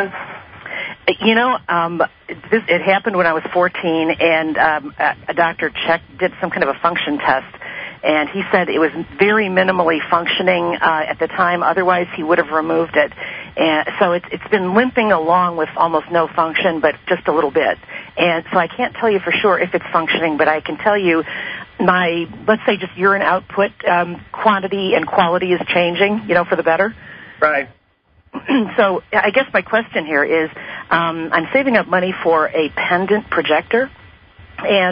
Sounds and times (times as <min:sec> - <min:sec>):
Speech: 0:00.0 - 0:27.7, 0:28.4 - 0:33.9, 0:34.6 - 0:34.9.